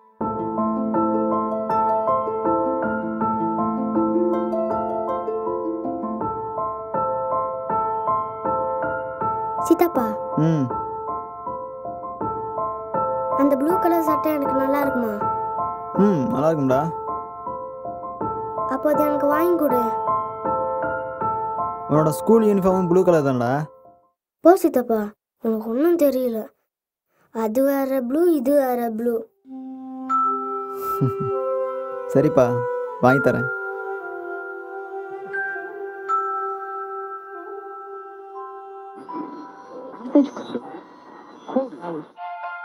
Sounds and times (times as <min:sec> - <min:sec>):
Music: 0:00.0 - 0:24.2, 0:29.0 - 0:42.6.